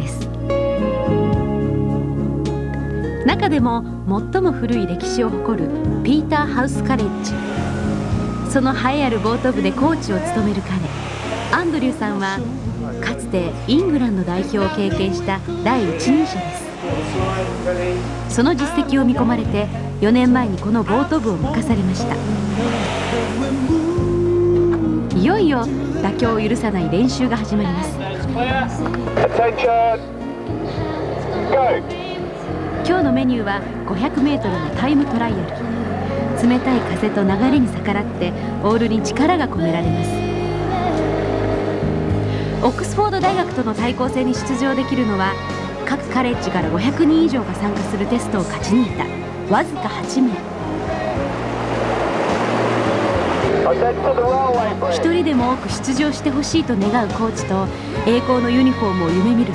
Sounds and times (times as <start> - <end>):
Music: 0.0 - 59.5.